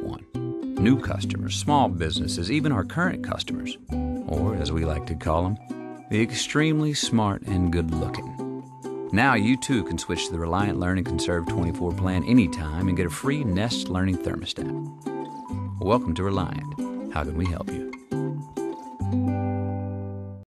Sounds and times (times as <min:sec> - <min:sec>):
Speech: 0:00.0 - 0:00.2, 0:00.8 - 0:08.4, 0:09.1 - 0:14.8, 0:15.8 - 0:17.9
Jingle (music): 0:00.0 - 0:20.3.